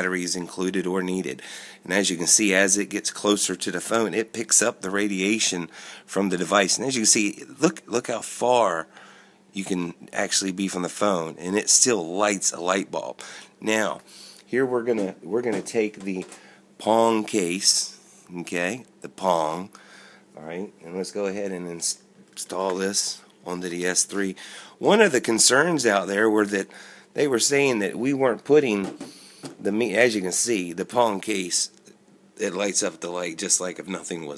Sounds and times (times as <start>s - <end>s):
Speech: 0.0s - 8.9s, 9.6s - 19.7s, 20.4s - 29.0s, 29.6s - 31.8s, 32.4s - 34.3s.